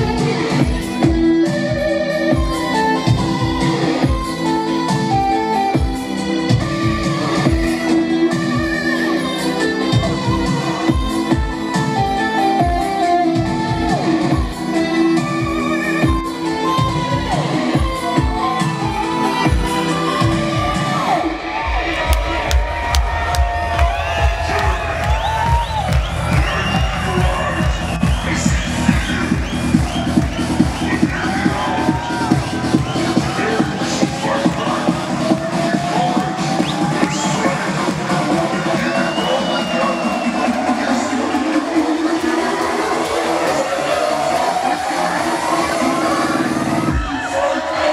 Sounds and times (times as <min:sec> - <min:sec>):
Electronic dance music: 0:00.0 - 0:47.9
Electronica: 0:00.0 - 0:47.9.